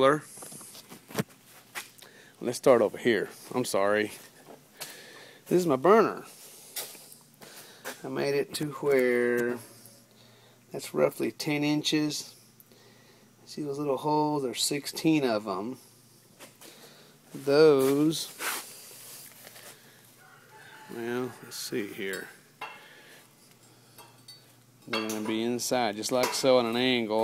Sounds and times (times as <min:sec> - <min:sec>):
Speech: 0:00.0 - 0:00.3, 0:02.4 - 0:04.2, 0:05.5 - 0:06.3, 0:08.0 - 0:09.7, 0:10.7 - 0:12.4, 0:13.5 - 0:15.8, 0:17.3 - 0:18.4, 0:20.9 - 0:22.4, 0:24.9 - 0:27.2.